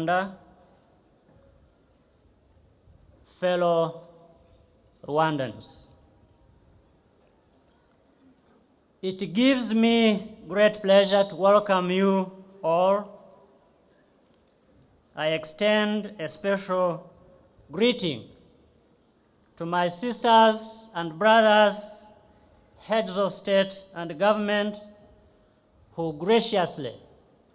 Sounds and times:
Male speech, man speaking: 0:00.0 - 0:00.4, 0:03.3 - 0:04.0, 0:05.0 - 0:05.9, 0:09.0 - 0:13.2, 0:15.2 - 0:17.1, 0:17.7 - 0:18.3, 0:19.6 - 0:22.2, 0:22.8 - 0:25.0, 0:26.0 - 0:27.1
Narration, monologue: 0:00.0 - 0:27.5.

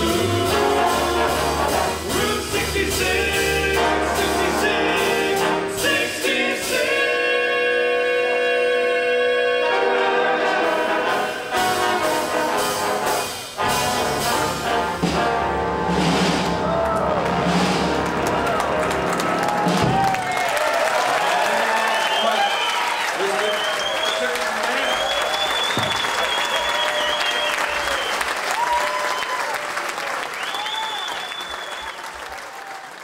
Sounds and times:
Trombone: 0:00.0 - 0:20.0
Applause: 0:16.8 - 0:33.0
Speech: 0:23.2 - 0:25.2.

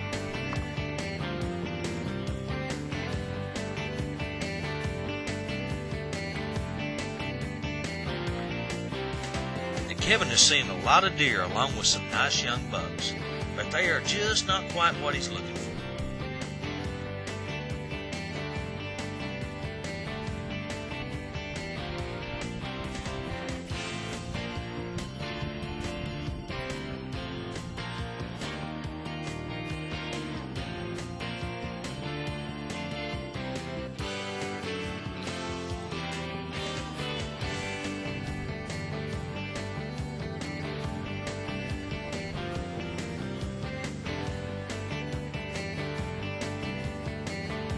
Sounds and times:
Music: 0:00.0 - 0:47.7
Speech: 0:09.9 - 0:15.9.

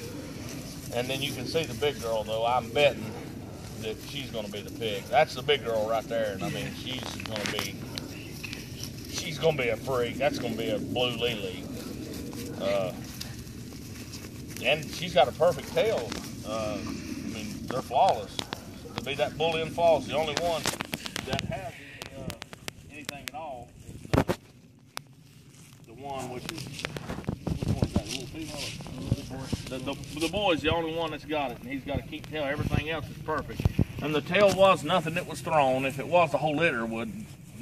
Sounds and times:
Outside, rural or natural: 0:00.0 - 0:37.6.

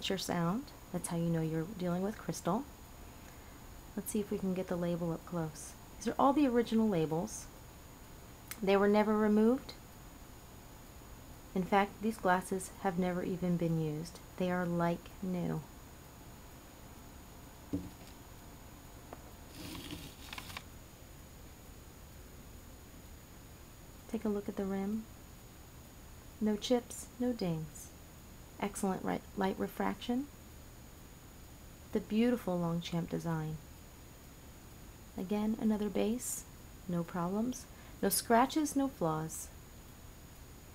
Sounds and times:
Speech: 0:00.0 - 0:02.7, 0:04.0 - 0:07.6, 0:08.6 - 0:09.8, 0:11.6 - 0:15.7, 0:24.1 - 0:25.1, 0:26.4 - 0:28.0, 0:28.6 - 0:30.3, 0:31.9 - 0:33.7, 0:35.2 - 0:39.6.

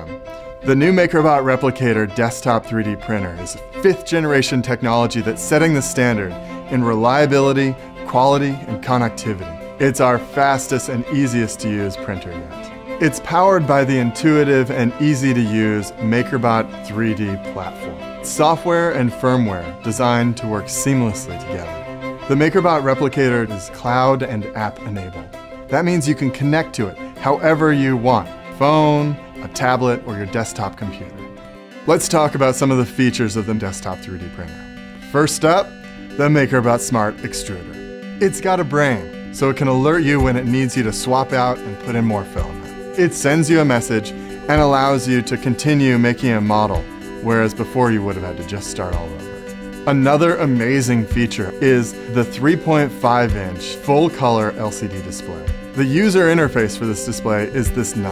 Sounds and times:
Speech: 0:00.0 - 0:31.2, 0:31.9 - 0:49.2, 0:49.9 - 0:58.1
Music: 0:00.0 - 0:58.1.

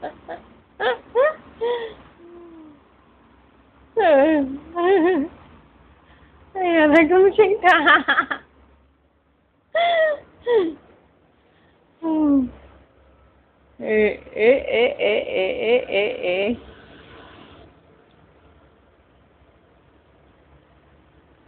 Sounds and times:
Speech: 0:06.6 - 0:07.9, 0:12.0 - 0:12.6, 0:13.8 - 0:16.6.

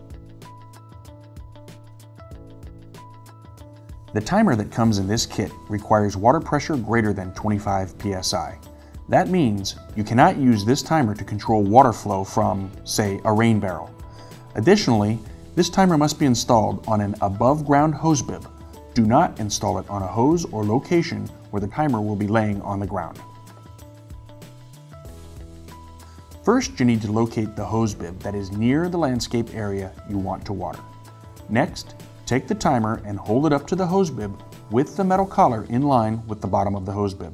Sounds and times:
Music: 0:00.0 - 0:37.3
Speech: 0:04.2 - 0:13.9, 0:14.6 - 0:23.2, 0:26.4 - 0:30.8, 0:31.5 - 0:37.3.

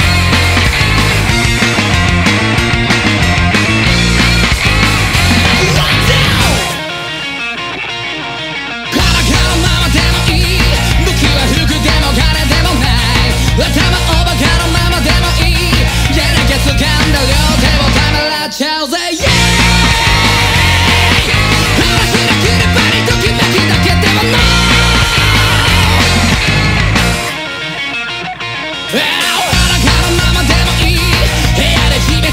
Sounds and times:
Soundtrack music: 0:00.0 - 0:08.4, 0:19.2 - 0:32.3.

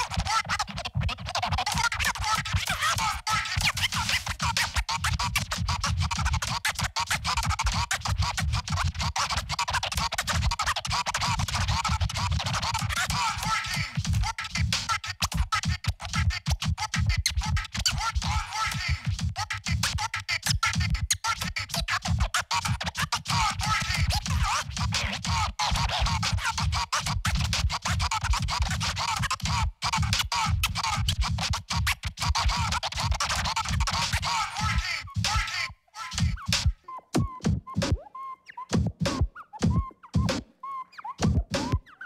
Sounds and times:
Scratching (performance technique): 0:00.0 - 0:42.0.

